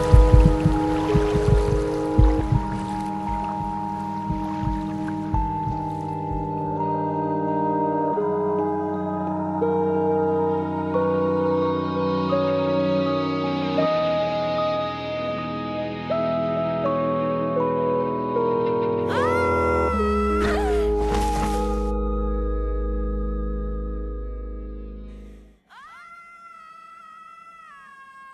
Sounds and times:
Music: 0.0s - 25.7s.

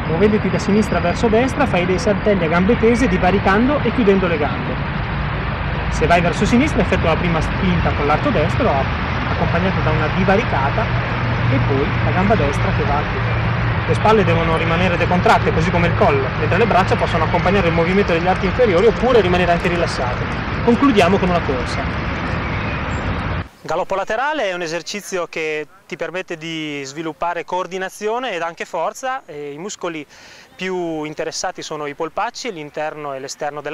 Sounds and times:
Outside, rural or natural: 0.0s - 33.7s
Male speech, man speaking: 0.1s - 4.8s, 5.9s - 10.9s, 11.5s - 13.3s, 13.9s - 21.9s, 23.6s - 33.7s.

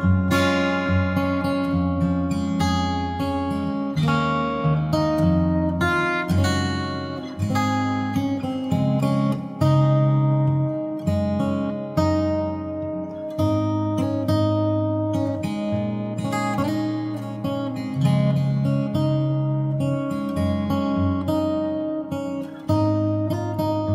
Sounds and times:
Acoustic guitar: 0.0s - 23.9s.

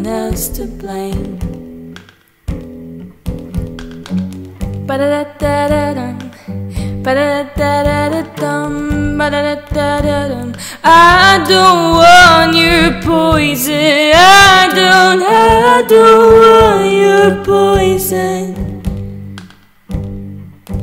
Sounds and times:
Inside, small room: 0.0s - 20.8s
Music: 0.0s - 20.8s
Singing: 7.1s - 18.8s.

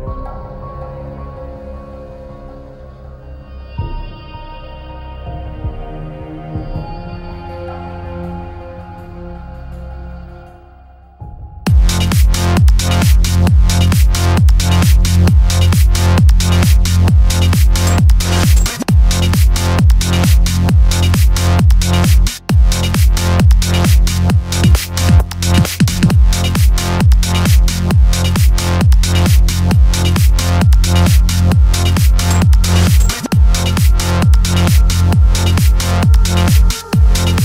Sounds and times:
Music: 0.0s - 37.4s.

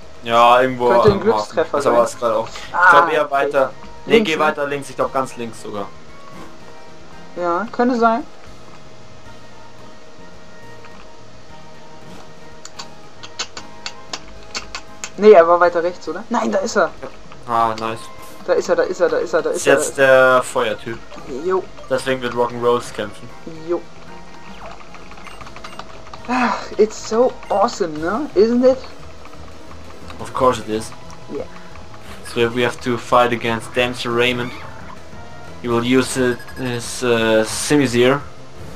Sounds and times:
Speech: 0.3s - 5.9s, 15.2s - 16.9s, 17.5s - 23.8s, 30.2s - 31.4s, 32.3s - 34.6s, 35.7s - 38.2s.

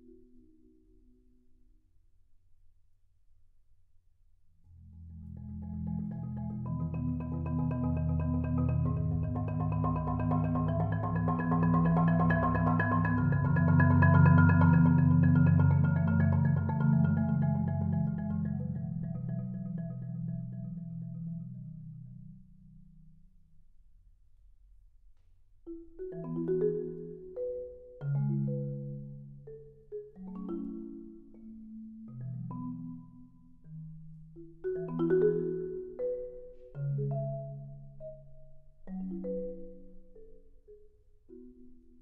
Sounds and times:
Music: 0.0s - 2.8s, 4.6s - 24.2s, 25.1s - 42.0s.

